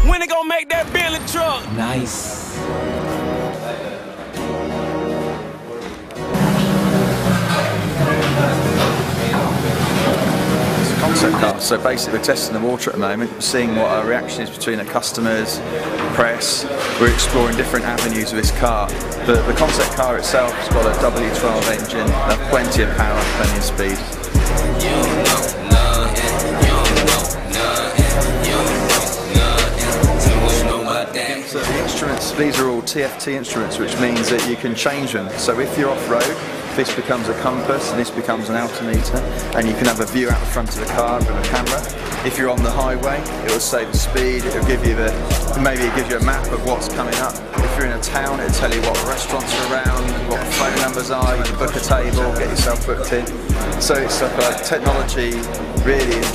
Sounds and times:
Speech: 0.0 - 2.6, 7.6 - 24.2, 30.3 - 56.3
Music: 0.0 - 56.3.

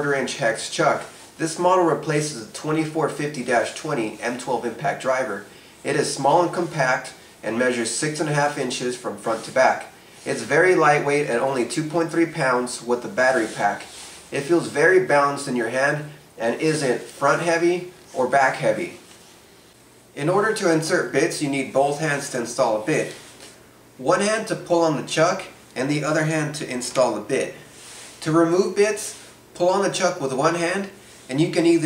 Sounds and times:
Speech: 0.0 - 19.0, 20.2 - 23.2, 24.0 - 31.8.

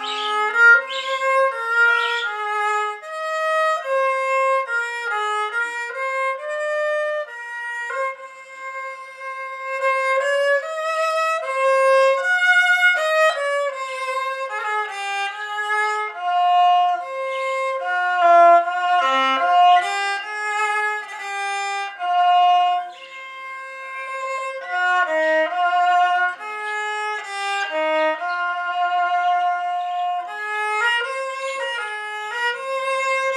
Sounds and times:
Violin, fiddle: 0.0 - 33.3.

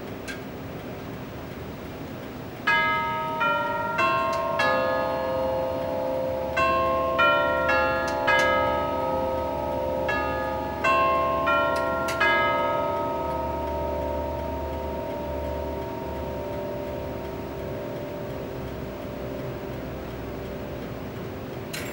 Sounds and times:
Church bell: 2.7 - 21.9.

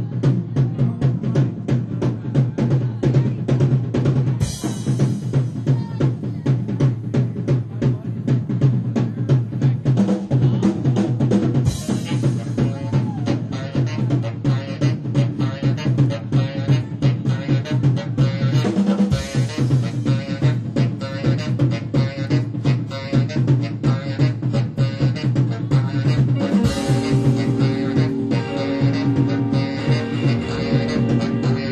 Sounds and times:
Music: 0.0 - 31.7.

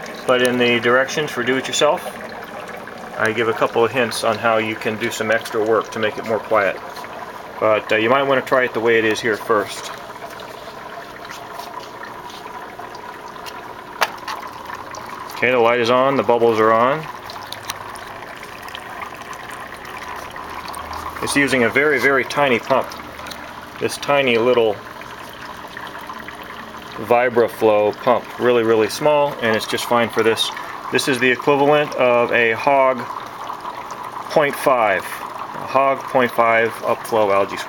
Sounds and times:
Boiling: 0.0 - 37.6
Speech: 0.3 - 2.2, 3.2 - 6.8, 7.6 - 10.0, 15.4 - 17.1, 21.2 - 22.9, 23.8 - 24.8, 27.0 - 33.1, 34.3 - 37.6.

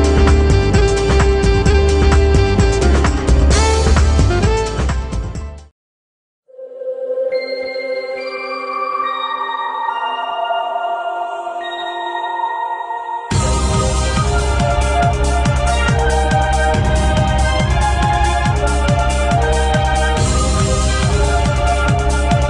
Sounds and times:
Music: 0.0 - 5.7, 7.3 - 22.4.

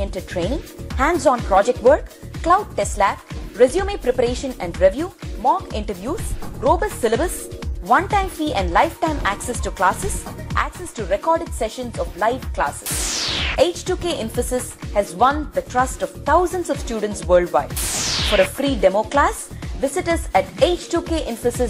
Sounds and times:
Speech: 0.0 - 12.9, 13.6 - 17.8, 18.4 - 21.6
Music: 0.0 - 21.6.

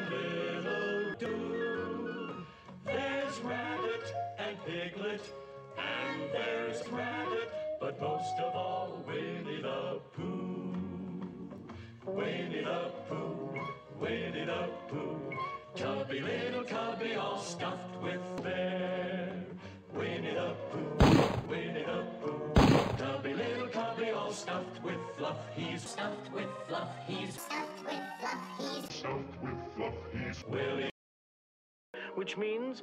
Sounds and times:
Music: 0.0 - 30.9, 32.0 - 32.8.

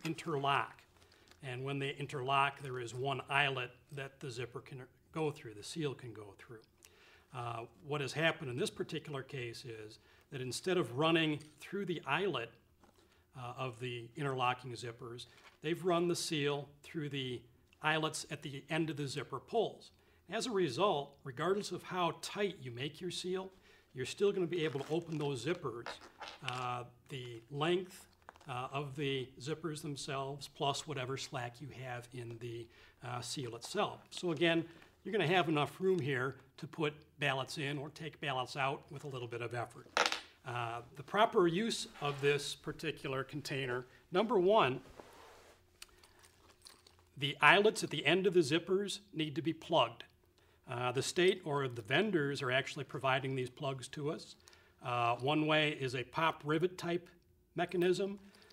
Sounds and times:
Speech: 0.0 - 6.7, 7.3 - 12.6, 13.4 - 44.9, 47.2 - 50.1, 50.7 - 58.3.

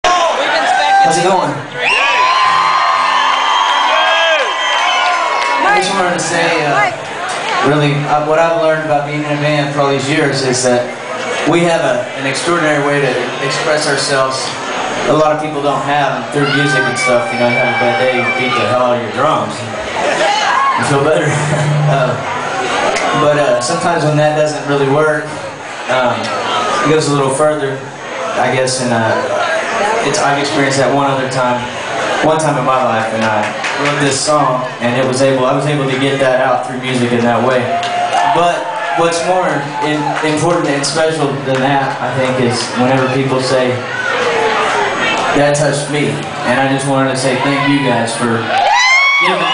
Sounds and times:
Crowd: 0.0 - 49.5.

